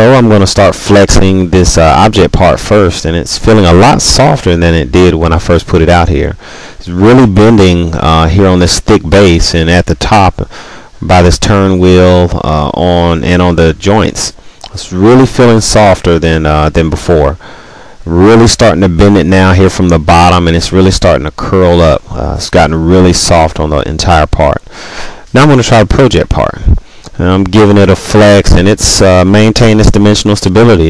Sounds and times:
Speech: 0.0 - 17.4, 18.0 - 24.7, 25.3 - 30.8.

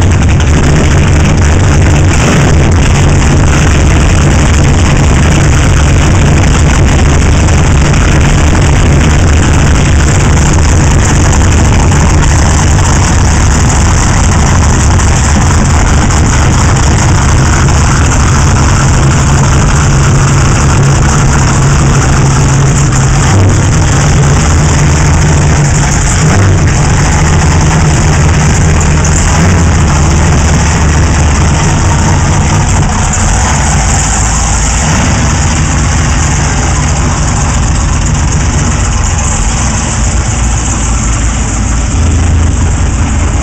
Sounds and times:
Motorboat, speedboat: 0.0 - 43.4.

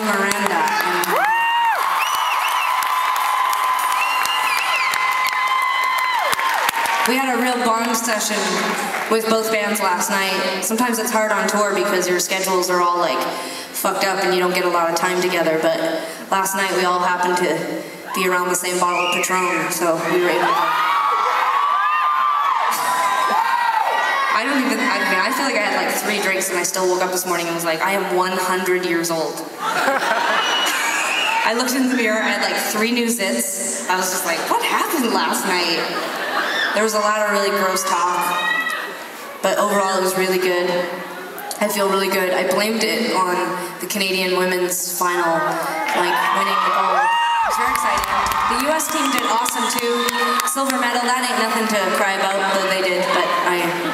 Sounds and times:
Speech: 0.0 - 1.2, 7.1 - 20.5, 24.4 - 29.5, 31.4 - 36.0, 36.8 - 38.4, 39.4 - 53.9.

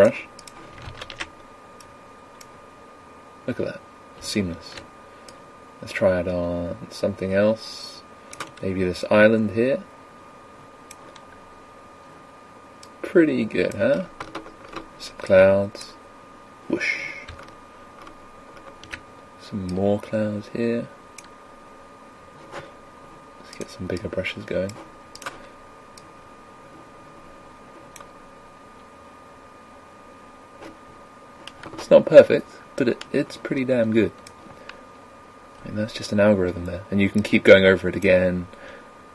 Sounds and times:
Speech: 0.0 - 0.3, 3.5 - 4.8, 5.8 - 8.0, 8.6 - 9.9, 13.0 - 14.1, 15.0 - 16.0, 19.4 - 21.0, 23.5 - 24.8, 31.8 - 34.2, 35.6 - 38.5.

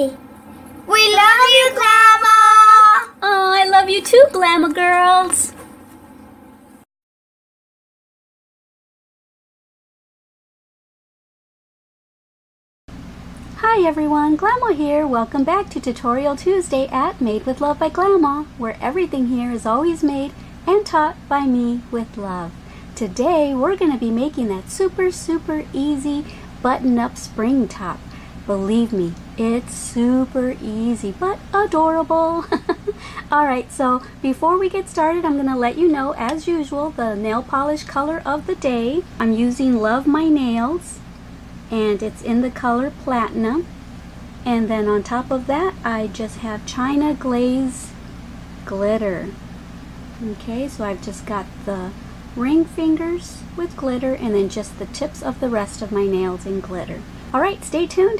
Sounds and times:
Child speech, kid speaking: 0.8 - 5.6.

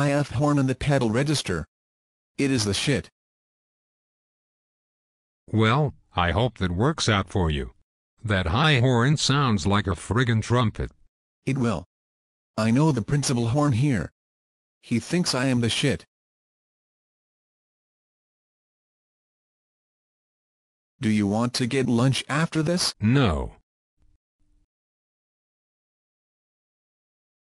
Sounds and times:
Speech synthesizer: 0.0 - 1.7, 2.4 - 3.1, 5.5 - 11.9, 12.6 - 14.1, 14.9 - 16.1, 21.0 - 23.6.

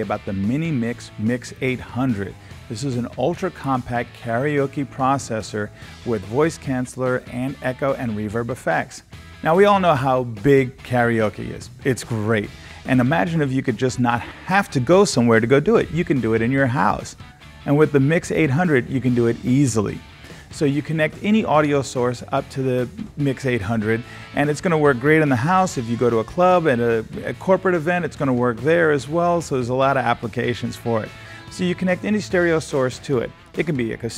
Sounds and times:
Speech: 0.0 - 20.0, 20.6 - 34.1
Music: 0.0 - 34.1.

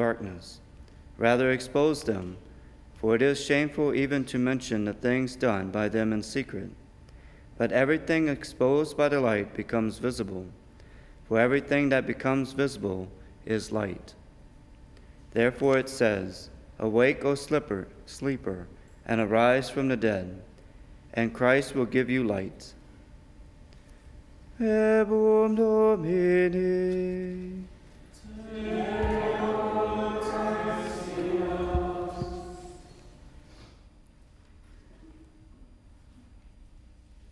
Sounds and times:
Chant: 24.6 - 33.2.

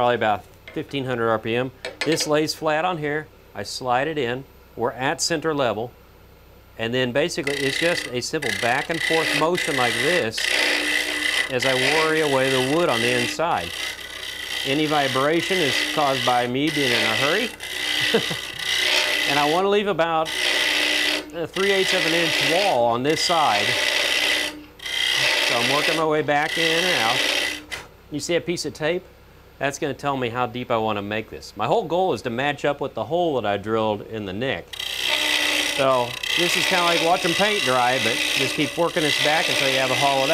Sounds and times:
Speech: 0.0 - 5.9, 6.8 - 10.4, 11.5 - 13.7, 14.7 - 17.6, 19.3 - 20.3, 21.3 - 23.8, 25.5 - 27.2, 28.1 - 34.7, 35.8 - 40.3
Tools: 1.8 - 2.3, 16.7 - 19.5.

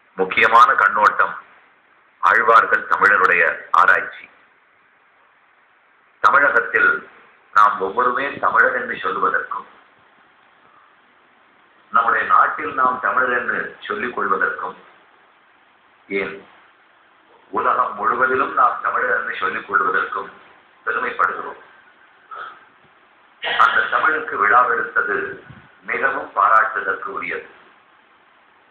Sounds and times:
Narration, monologue: 0.0 - 28.7
Male speech, man speaking: 0.2 - 1.4, 2.2 - 4.3, 6.2 - 9.7, 11.9 - 14.8, 16.1 - 16.5, 17.5 - 21.7, 23.5 - 27.6.

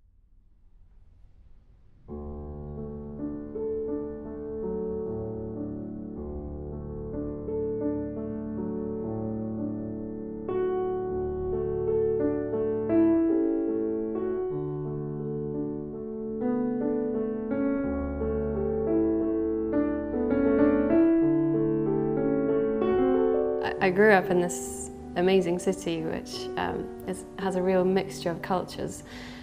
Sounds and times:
Music: 0.6 - 29.4
Speech: 23.6 - 29.1.

